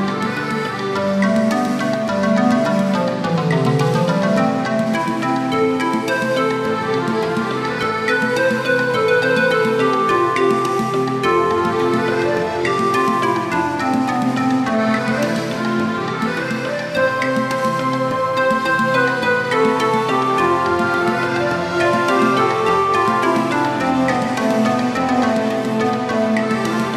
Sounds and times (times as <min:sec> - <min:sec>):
Music: 0:00.0 - 0:26.9.